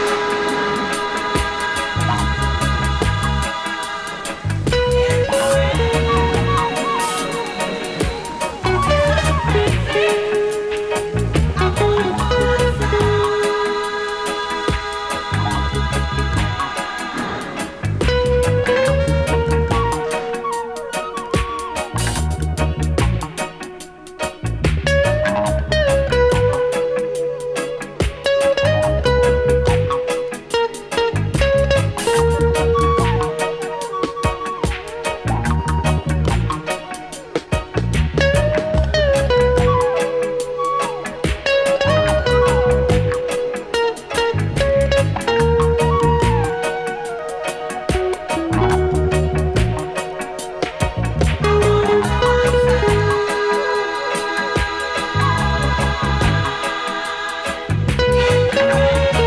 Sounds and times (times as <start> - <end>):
Music: 0.0 - 59.2.